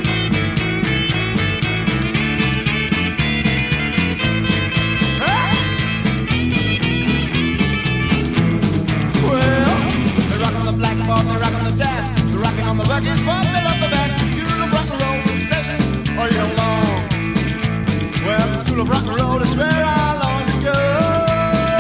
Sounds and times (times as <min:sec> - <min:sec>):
Country: 0:00.0 - 0:21.8
Psychedelic rock: 0:00.0 - 0:21.8
Rock and roll: 0:00.0 - 0:21.8.